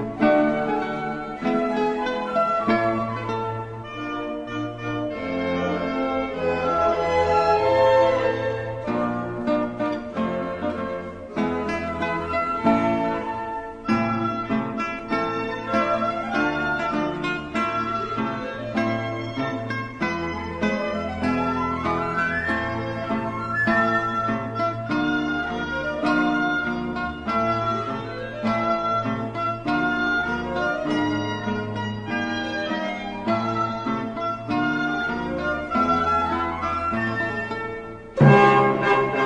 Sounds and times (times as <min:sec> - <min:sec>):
Piano: 0:00.0 - 0:39.2.